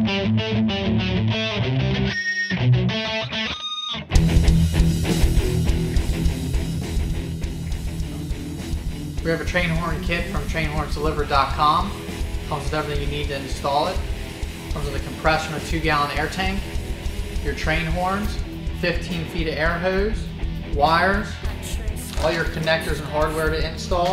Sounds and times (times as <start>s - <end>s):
Music: 0.0s - 24.1s
Speech: 9.2s - 14.0s, 14.8s - 16.6s, 17.4s - 20.2s, 20.8s - 24.1s.